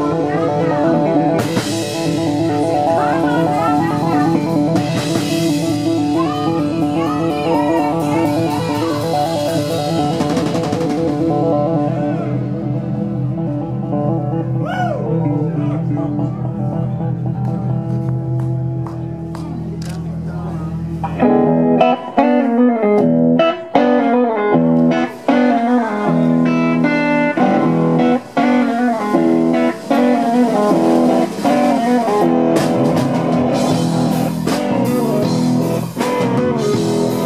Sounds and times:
Music: 0:00.0 - 0:37.2.

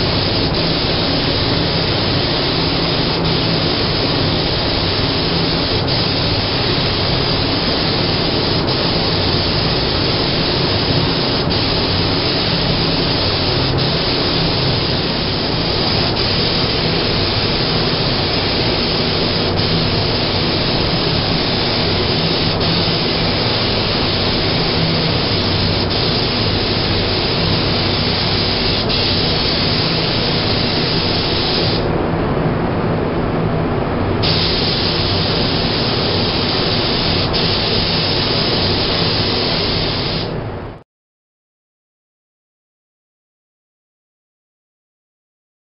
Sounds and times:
Spray: 0:00.0 - 0:31.9, 0:34.2 - 0:40.4.

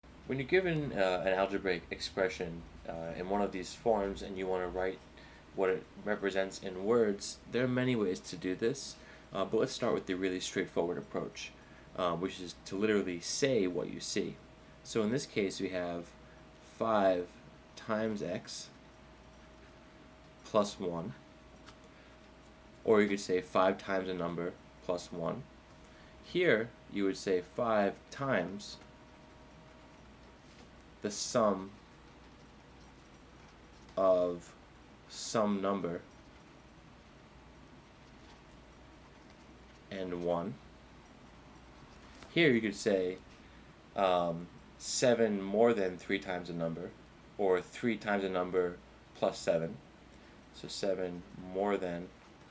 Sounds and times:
Speech: 0:00.3 - 0:05.0, 0:05.6 - 0:18.8, 0:20.4 - 0:21.2, 0:22.8 - 0:25.5, 0:26.2 - 0:28.8, 0:31.0 - 0:31.8, 0:34.0 - 0:36.1, 0:39.9 - 0:40.6, 0:42.3 - 0:43.2, 0:44.0 - 0:49.8, 0:50.5 - 0:52.2.

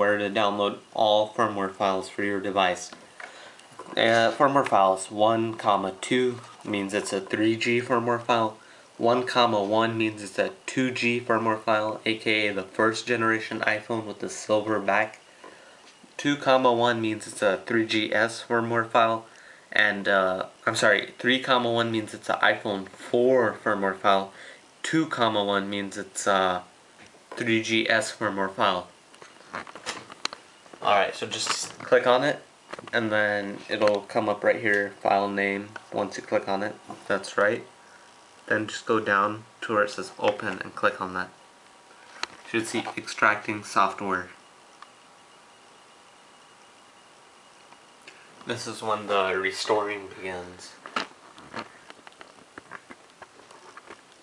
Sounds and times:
Speech: 0:00.0 - 0:03.0, 0:03.9 - 0:15.2, 0:16.2 - 0:26.7, 0:27.4 - 0:29.0, 0:30.8 - 0:37.7, 0:38.5 - 0:41.4, 0:42.5 - 0:44.4, 0:48.5 - 0:50.8
Inside, small room: 0:00.0 - 0:54.2.

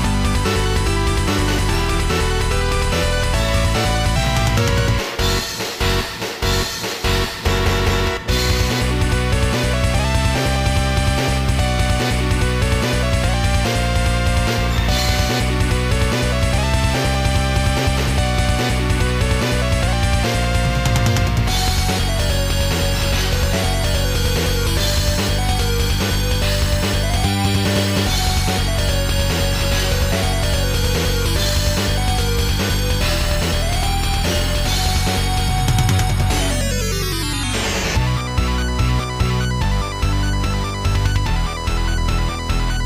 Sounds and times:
Music: 0:00.0 - 0:42.8.

